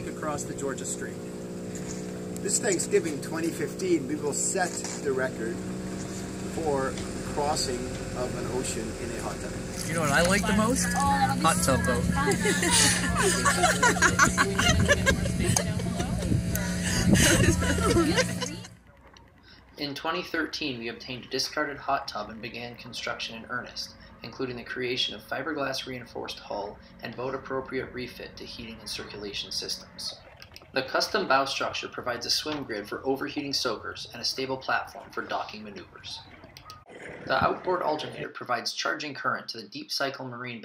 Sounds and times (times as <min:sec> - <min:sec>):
Speech: 0:19.8 - 0:30.2, 0:30.8 - 0:36.2, 0:37.3 - 0:40.6.